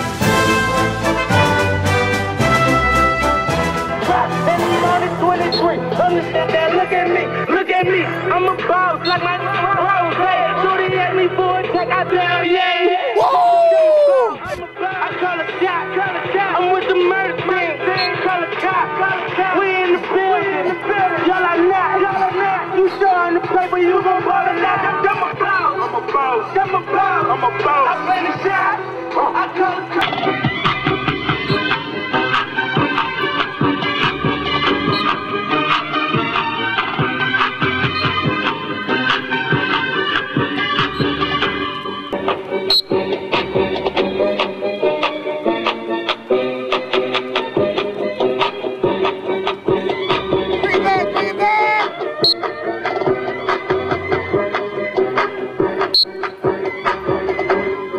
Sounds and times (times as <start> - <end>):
Music: 0.0 - 57.9.